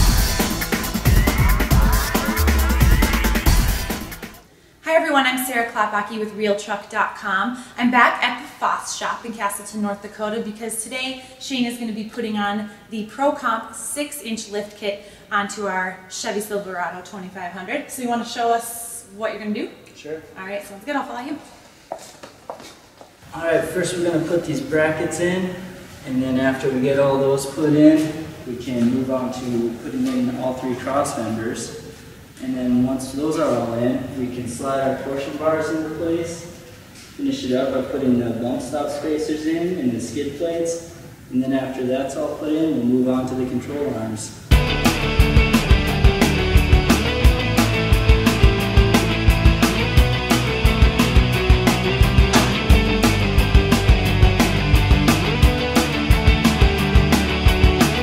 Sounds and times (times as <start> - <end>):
Speech: 23.4 - 36.5.